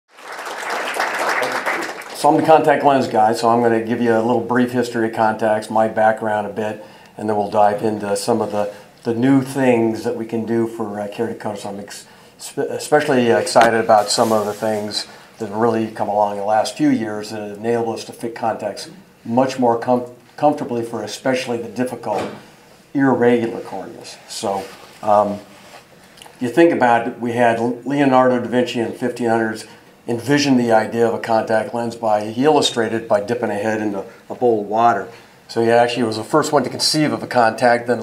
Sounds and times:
Speech: 1.4s - 25.5s, 26.4s - 38.0s.

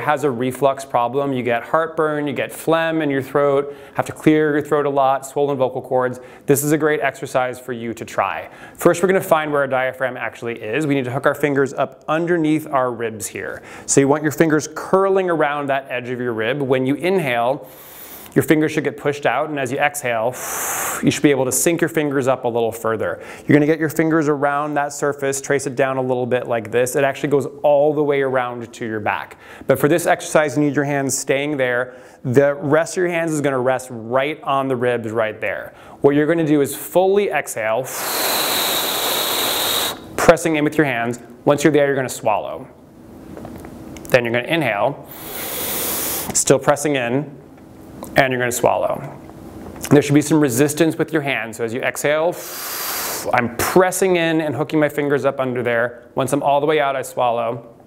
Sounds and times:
Speech: 0.0s - 17.6s, 18.4s - 20.4s, 21.0s - 37.9s, 40.2s - 42.8s, 44.1s - 45.0s, 46.3s - 47.4s, 48.1s - 49.2s, 49.8s - 52.4s, 53.3s - 57.7s.

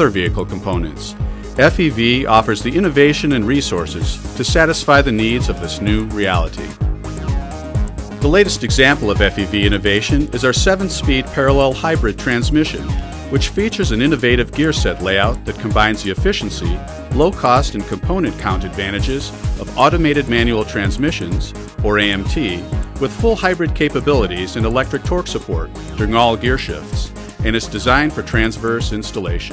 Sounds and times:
Speech: 0.0s - 6.8s, 8.2s - 29.5s
Music: 0.0s - 29.5s.

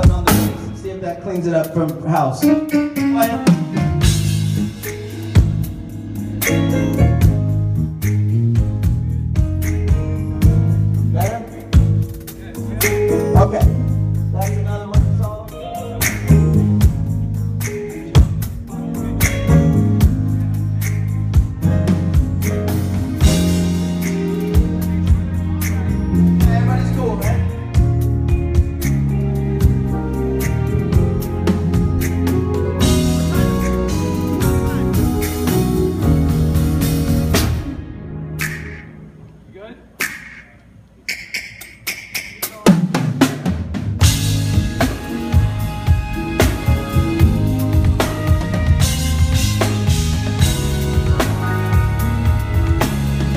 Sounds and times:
Music: 0.0s - 53.3s.

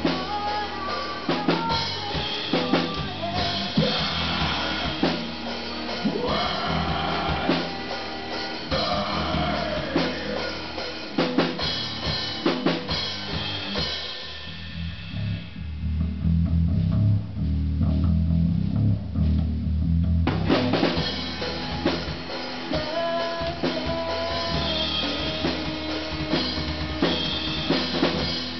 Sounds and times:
Cymbal: 0.0s - 16.2s
Bass drum: 0.0s - 28.5s
Drum kit: 0.0s - 28.5s.

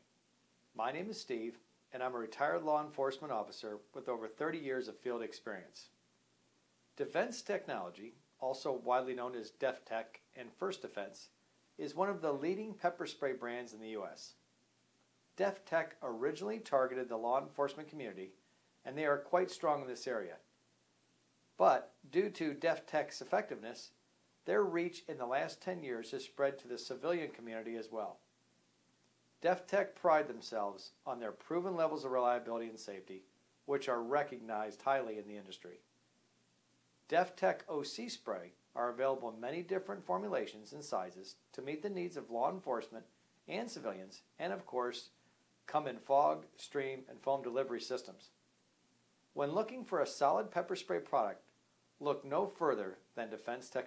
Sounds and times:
Speech: 0.8s - 6.0s, 7.0s - 14.4s, 15.4s - 20.5s, 21.6s - 28.2s, 29.4s - 35.9s, 37.1s - 48.4s, 49.4s - 53.8s.

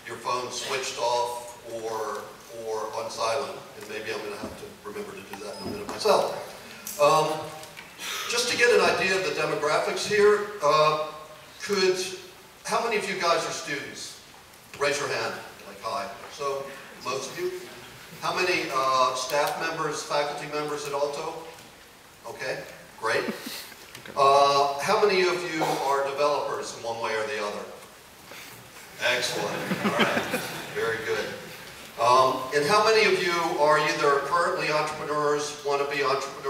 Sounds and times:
Male speech, man speaking: 0.0s - 7.5s, 8.3s - 14.2s, 14.8s - 21.5s, 22.3s - 23.3s, 24.2s - 27.8s, 29.0s - 29.9s, 30.7s - 31.4s, 32.0s - 36.4s
Narration, monologue: 0.0s - 36.4s.

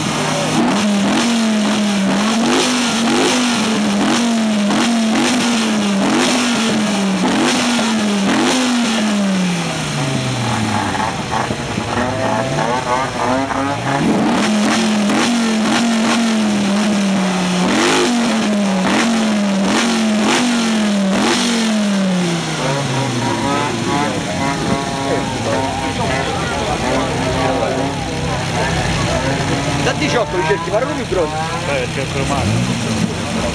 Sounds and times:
Speech: 24.0s - 33.5s.

